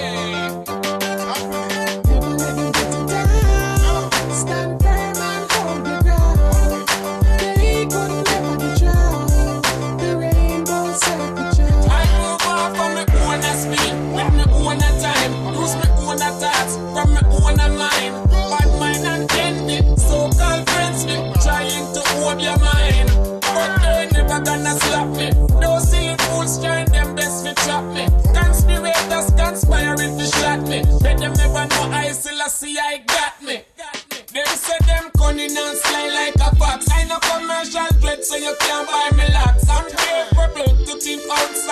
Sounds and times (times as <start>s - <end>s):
Male singing: 0.0s - 41.7s
Music: 0.0s - 41.7s.